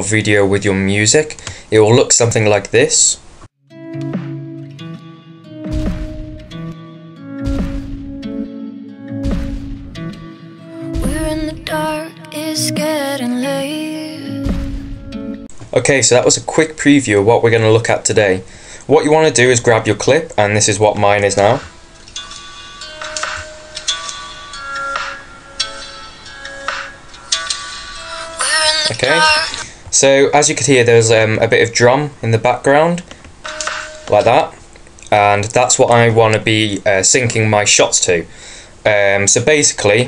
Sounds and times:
Speech: 0:00.0 - 0:03.2, 0:15.7 - 0:21.7, 0:28.4 - 0:33.1, 0:34.1 - 0:38.3, 0:38.9 - 0:40.0.

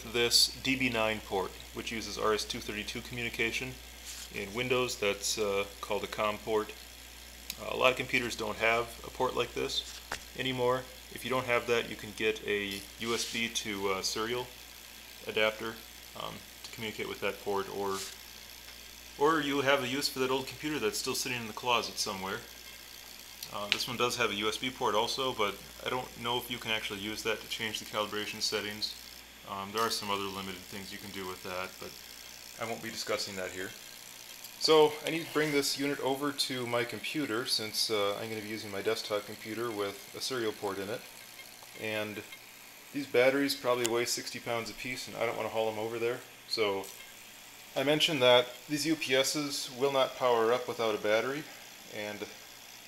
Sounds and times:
Speech: 0:00.0 - 0:06.8, 0:07.5 - 0:14.6, 0:15.2 - 0:18.2, 0:19.2 - 0:22.5, 0:23.4 - 0:32.0, 0:32.6 - 0:33.8, 0:34.6 - 0:41.1, 0:41.8 - 0:42.3, 0:43.0 - 0:47.0, 0:47.8 - 0:52.4.

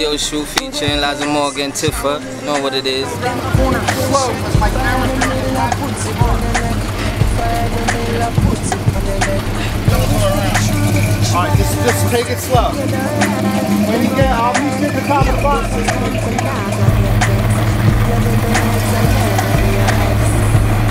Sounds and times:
Music: 0:00.0 - 0:20.9.

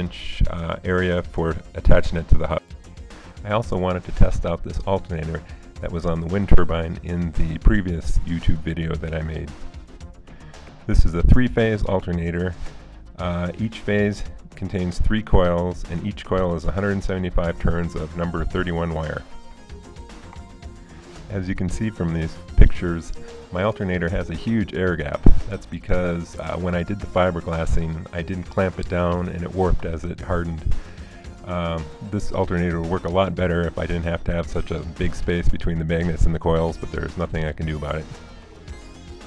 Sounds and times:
Speech: 0:00.0 - 0:02.6, 0:03.4 - 0:09.6, 0:10.9 - 0:12.6, 0:13.2 - 0:19.3, 0:21.3 - 0:30.8, 0:31.4 - 0:38.2
Music: 0:00.0 - 0:39.2.

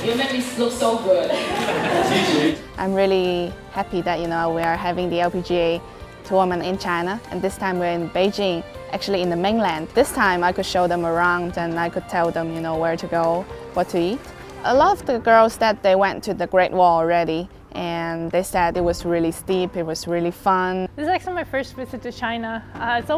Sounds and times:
Music: 0:00.0 - 0:23.1.

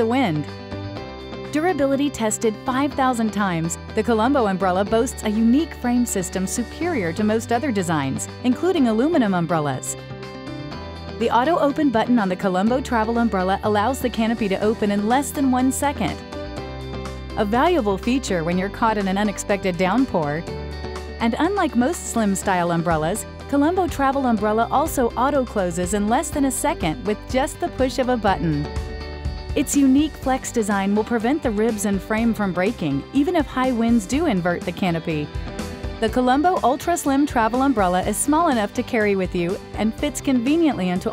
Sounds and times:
Speech: 0:00.0 - 0:00.5, 0:01.5 - 0:10.0, 0:11.2 - 0:16.2, 0:17.4 - 0:20.4, 0:21.2 - 0:28.7, 0:29.6 - 0:35.3, 0:36.0 - 0:41.1
Music: 0:00.0 - 0:41.1.

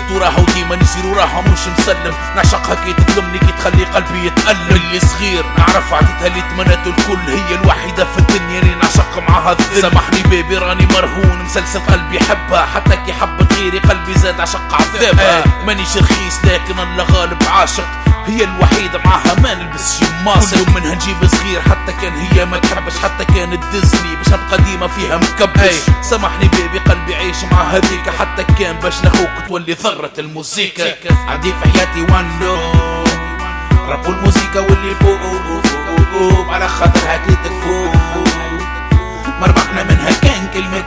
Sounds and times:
Music: 0:00.0 - 0:40.8.

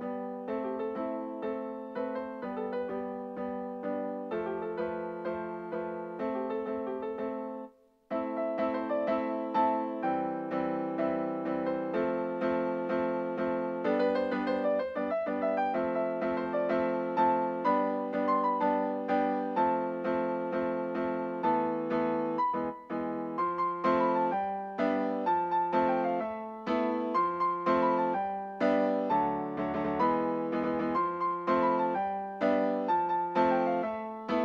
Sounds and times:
Music: 0:00.0 - 0:34.4.

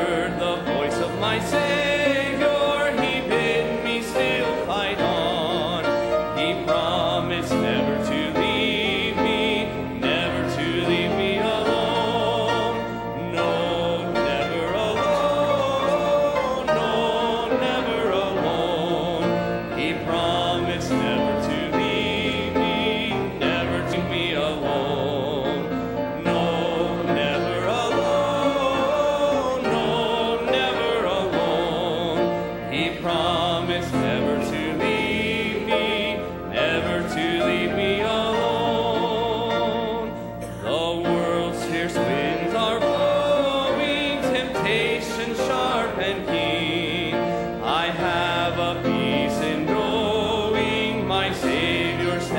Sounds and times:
Male singing: 0:00.0 - 0:52.3
Music: 0:00.0 - 0:52.3.

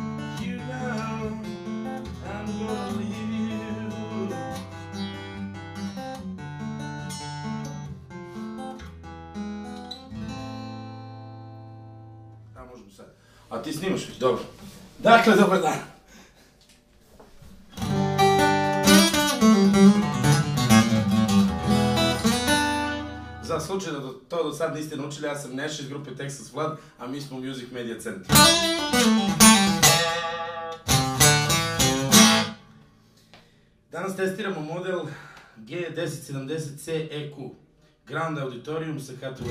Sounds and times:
Music: 0:00.0 - 0:12.6, 0:17.5 - 0:23.7, 0:28.3 - 0:33.7.

